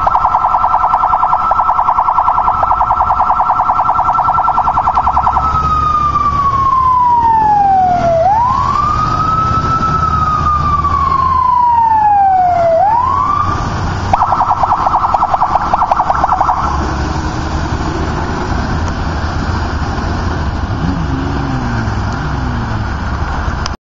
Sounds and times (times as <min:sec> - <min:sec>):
Motorcycle: 0:02.5 - 0:11.4, 0:15.1 - 0:23.8.